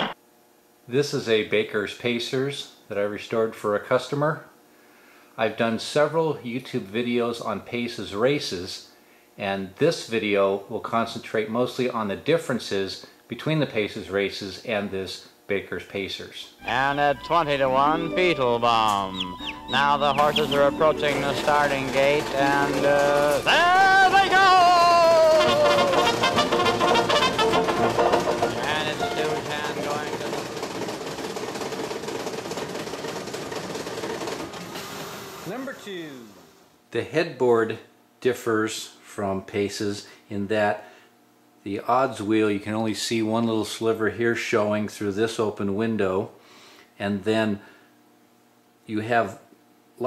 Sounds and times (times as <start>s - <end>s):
Speech: 0.9s - 4.5s, 5.4s - 26.0s, 28.5s - 30.4s, 35.5s - 40.8s, 41.6s - 46.4s, 47.0s - 47.6s, 48.8s - 50.0s
Music: 16.6s - 30.6s.